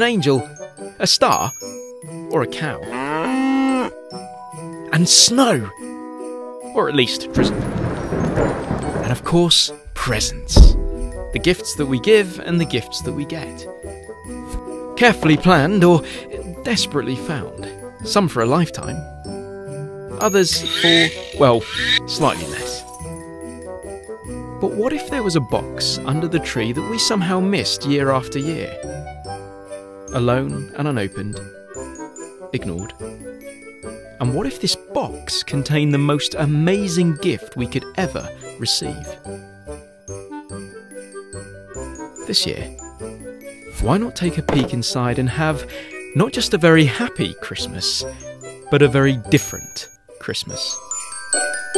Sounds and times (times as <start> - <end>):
Music: 0.0 - 51.7
Speech: 4.9 - 5.7, 6.8 - 7.5, 9.0 - 10.8, 11.4 - 13.6, 15.0 - 19.0, 20.2 - 22.8, 24.6 - 28.8, 30.1 - 31.4, 32.6 - 33.0, 34.2 - 39.2, 42.3 - 42.7, 43.8 - 48.1, 48.7 - 50.8.